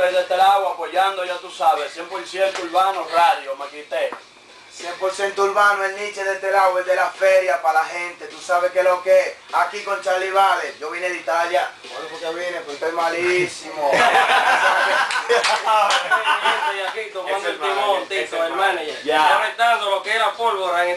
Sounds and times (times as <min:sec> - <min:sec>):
Speech: 0:00.0 - 0:04.2, 0:04.8 - 0:14.1, 0:15.3 - 0:20.9.